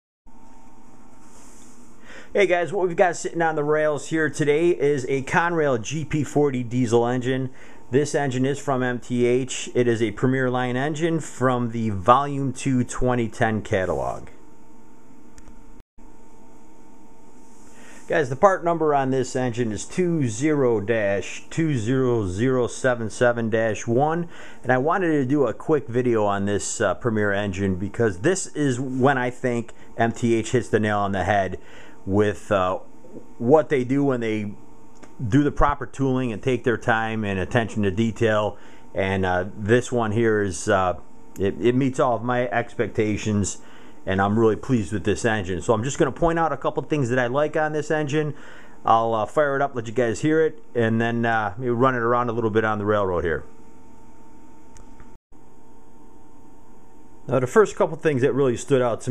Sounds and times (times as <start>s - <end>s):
Speech: 2.3s - 14.4s, 18.1s - 34.6s, 35.2s - 53.5s, 57.3s - 59.1s.